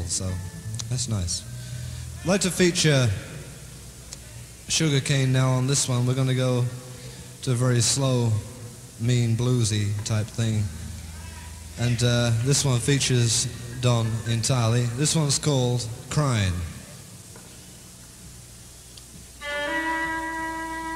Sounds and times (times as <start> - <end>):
Speech: 0.0 - 1.5, 2.2 - 3.4, 4.2 - 16.9
Music: 0.0 - 2.3, 19.4 - 20.9.